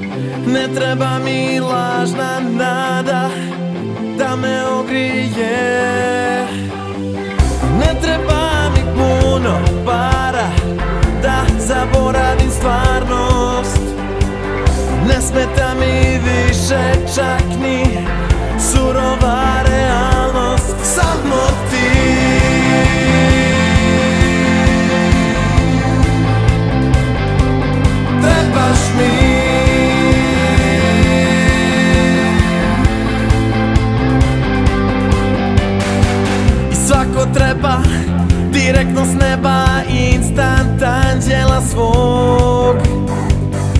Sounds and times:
Music: 0.0s - 43.7s.

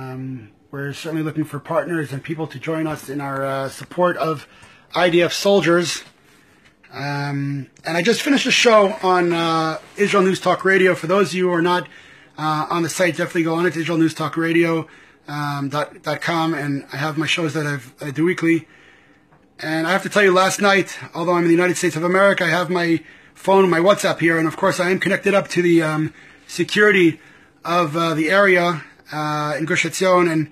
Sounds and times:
Speech: 0.0s - 6.1s, 6.9s - 18.7s, 19.6s - 30.5s.

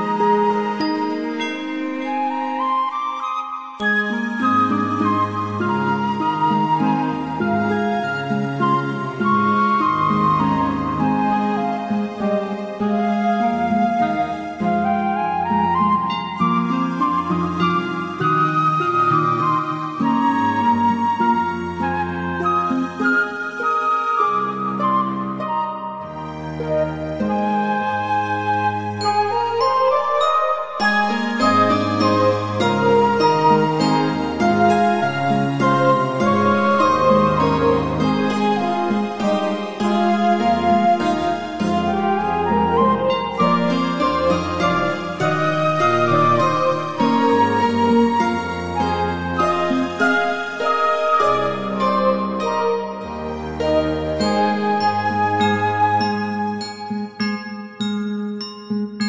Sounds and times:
Sad music: 0.0s - 59.0s.

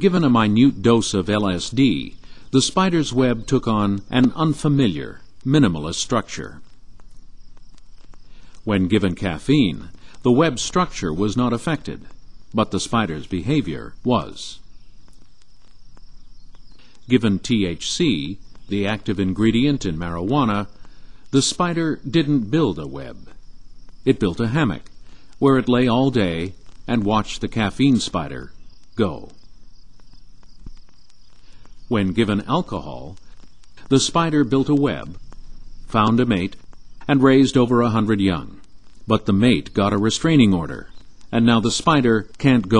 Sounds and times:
Speech: 0.0s - 6.6s, 8.6s - 14.6s, 17.0s - 23.3s, 24.1s - 29.4s, 31.9s - 33.2s, 33.8s - 35.2s, 35.9s - 42.7s.

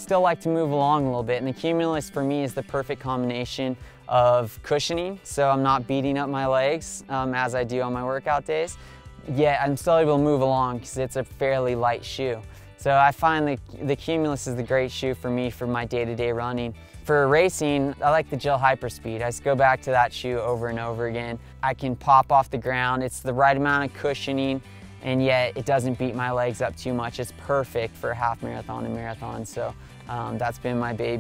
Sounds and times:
Music: 0.0s - 31.2s
Speech: 0.0s - 31.2s.

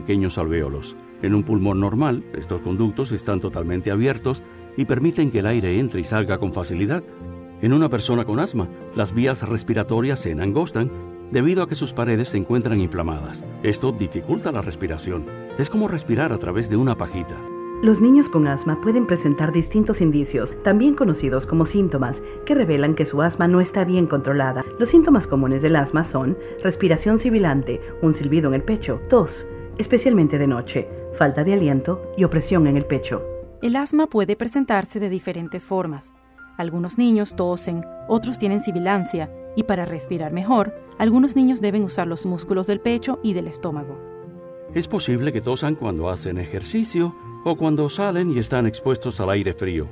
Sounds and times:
Speech: 0.0s - 7.0s, 7.6s - 44.0s, 44.7s - 49.9s
Music: 0.0s - 49.9s.

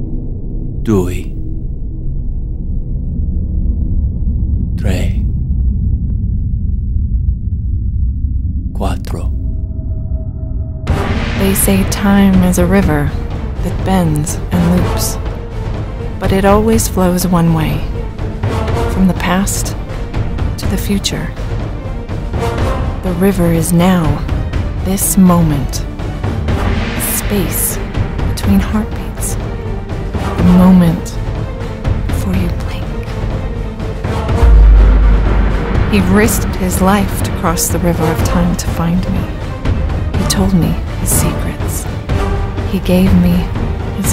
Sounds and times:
Music: 0.0s - 44.1s
Speech: 0.9s - 1.3s, 4.8s - 5.3s, 8.8s - 9.3s, 11.4s - 15.2s, 16.2s - 17.9s, 19.0s - 19.7s, 20.6s - 21.3s, 23.0s - 24.2s, 24.9s - 25.8s, 27.0s - 29.4s, 30.4s - 31.2s, 32.1s - 33.0s, 35.9s - 39.3s, 40.2s - 41.8s, 42.7s - 44.1s.

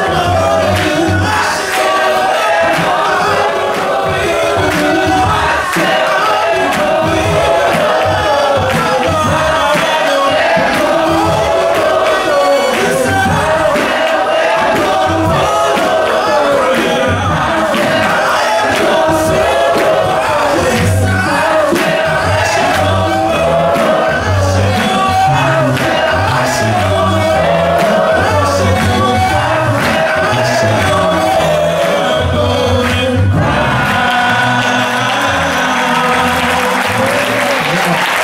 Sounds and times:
Music: 0.0s - 38.2s
Singing: 0.0s - 38.2s.

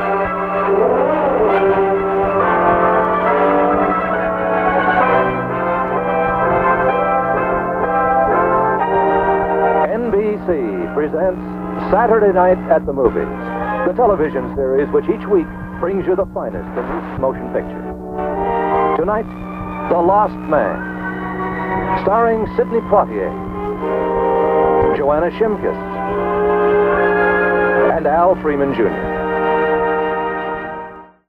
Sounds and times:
Music: 0.0s - 31.3s
Speech: 9.9s - 17.8s, 19.9s - 20.8s, 22.0s - 23.3s, 24.9s - 25.8s, 27.8s - 29.0s.

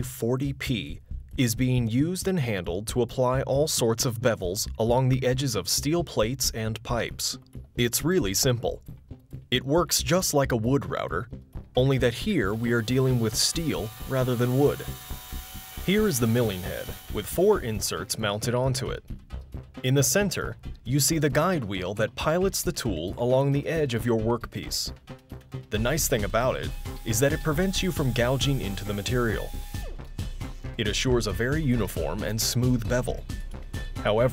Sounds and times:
Speech: 0.0s - 8.8s, 9.5s - 15.0s, 15.9s - 19.0s, 19.8s - 25.0s, 25.7s - 29.5s, 30.8s - 33.2s, 34.0s - 34.3s
Music: 0.0s - 34.3s.

